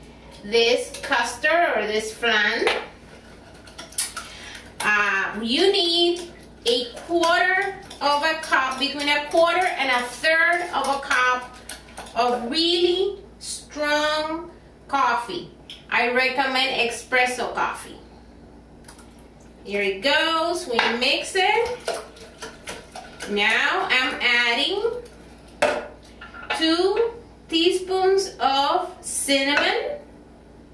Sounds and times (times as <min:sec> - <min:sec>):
Speech: 0:00.4 - 0:02.8, 0:04.8 - 0:11.6, 0:12.2 - 0:18.0, 0:19.6 - 0:21.8, 0:23.2 - 0:25.0, 0:26.5 - 0:30.0.